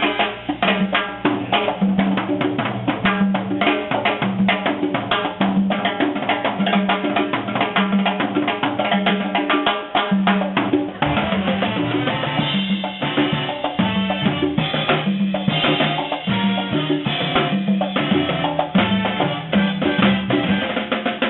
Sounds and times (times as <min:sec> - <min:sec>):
Drum: 0:00.0 - 0:21.3
Drum kit: 0:00.0 - 0:21.3.